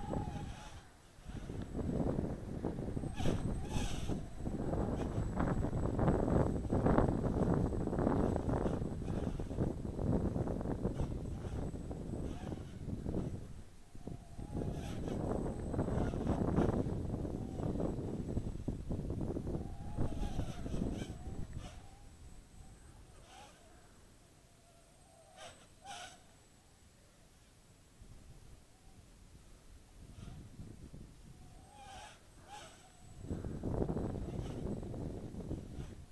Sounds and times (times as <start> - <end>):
Wind noise (microphone): 0.0 - 23.6, 30.0 - 36.1.